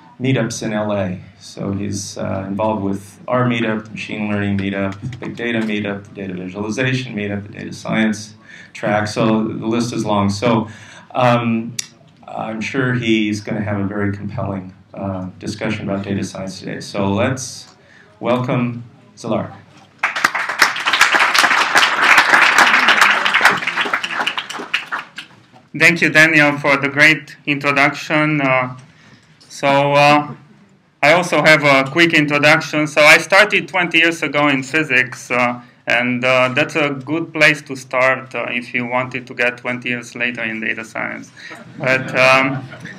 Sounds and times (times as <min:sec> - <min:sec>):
Speech: 0:00.0 - 0:19.9, 0:25.7 - 0:42.9.